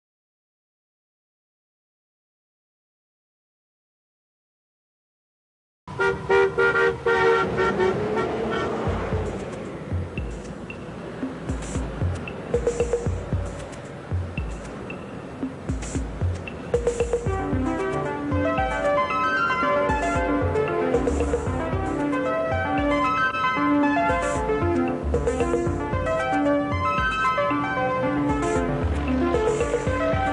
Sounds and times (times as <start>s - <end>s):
Vehicle horn, car horn, honking: 5.9s - 8.8s
Music: 7.6s - 30.3s.